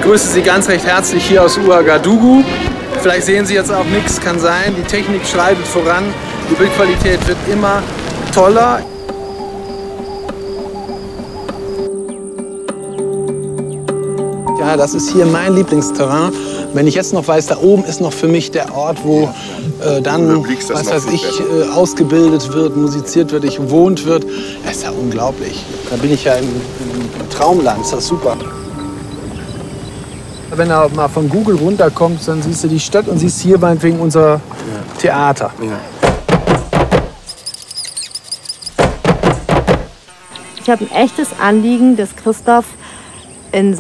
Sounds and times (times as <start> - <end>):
Music: 0.0 - 30.1, 38.8 - 43.0.